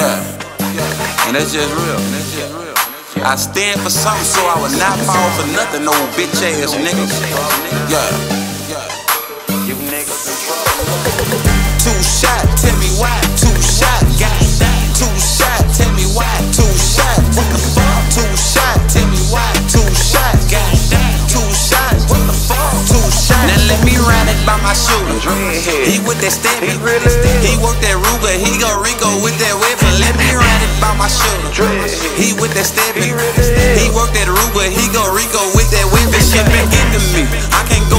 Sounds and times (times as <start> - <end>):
Music: 0.0 - 37.9.